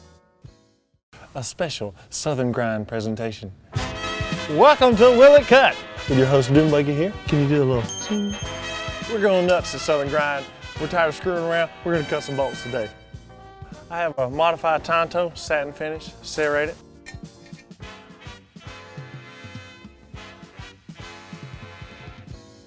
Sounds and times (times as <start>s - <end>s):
Music: 0.0s - 1.0s, 3.7s - 22.6s
Speech: 1.3s - 3.6s, 4.5s - 7.9s, 9.1s - 12.9s, 13.9s - 16.8s.